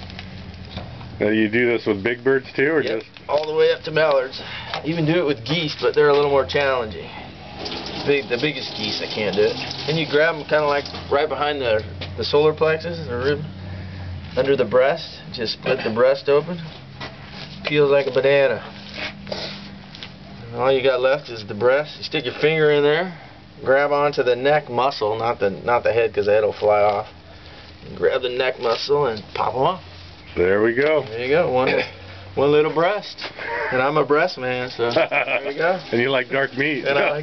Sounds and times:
Speech: 1.2s - 7.2s, 8.0s - 13.5s, 14.4s - 16.7s, 20.4s - 27.1s, 27.9s - 29.8s, 30.4s - 37.2s.

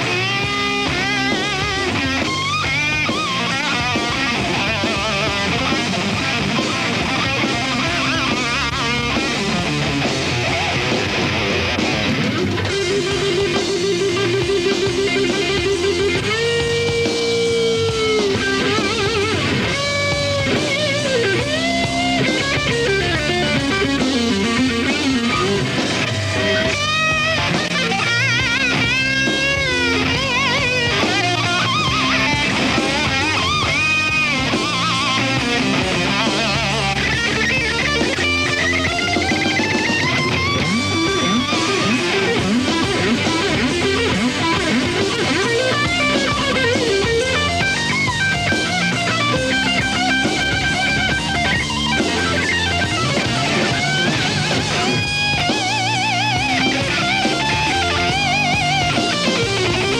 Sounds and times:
Guitar: 0.0s - 59.9s.

